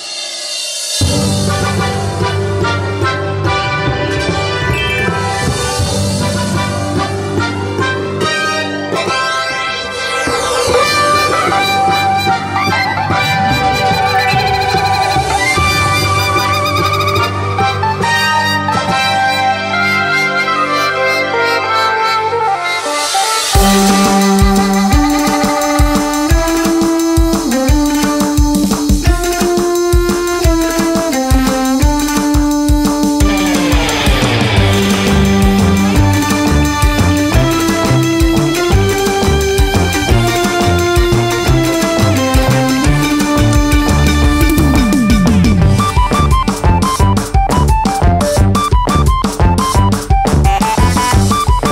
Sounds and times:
Music: 0.0 - 51.7.

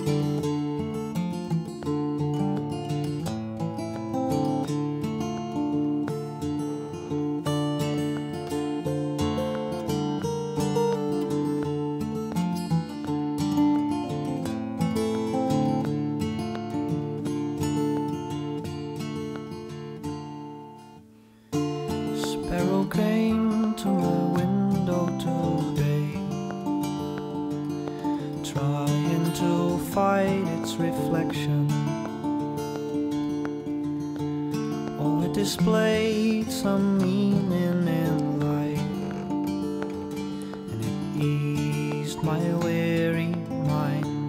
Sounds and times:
Music: 0.0 - 44.2.

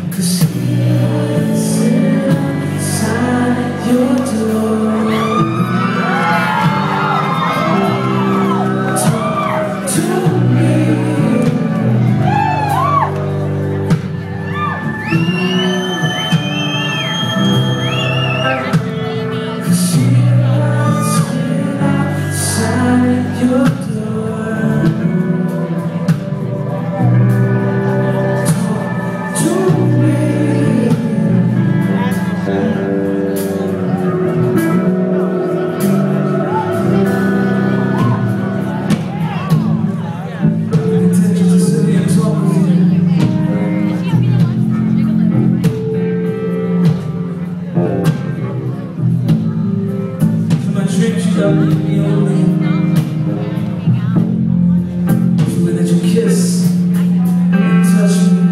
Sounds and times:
Music: 0.0 - 58.5.

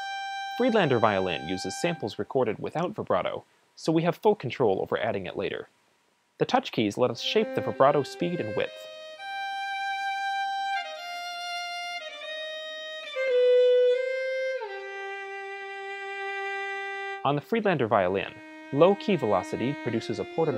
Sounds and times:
Musical instrument: 0.0 - 2.2, 7.2 - 17.2, 18.1 - 20.5
Speech: 0.6 - 5.7, 6.4 - 8.8, 17.2 - 20.5.

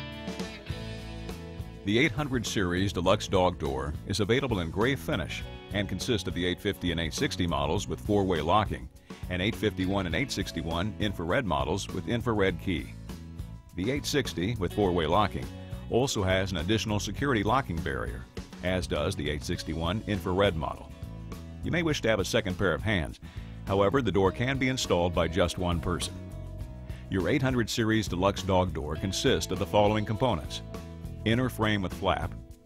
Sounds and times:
Music: 0.0 - 32.6
Speech: 1.8 - 13.0, 13.7 - 20.9, 21.6 - 26.2, 27.1 - 32.4.

